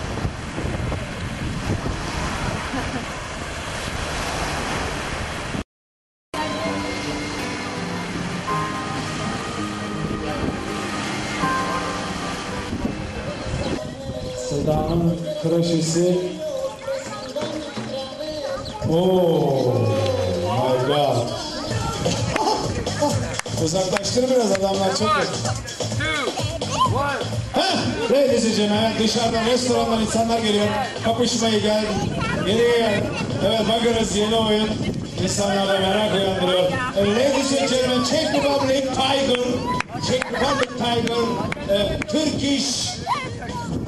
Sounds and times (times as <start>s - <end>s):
Music: 6.4s - 43.8s.